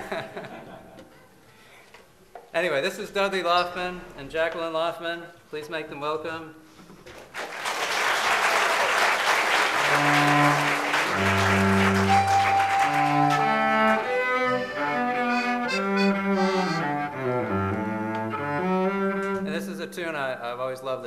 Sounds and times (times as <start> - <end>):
Classical music: 9.4 - 20.1
Cello: 9.6 - 19.8
Accordion: 9.8 - 19.6
Violin, fiddle: 9.9 - 19.5.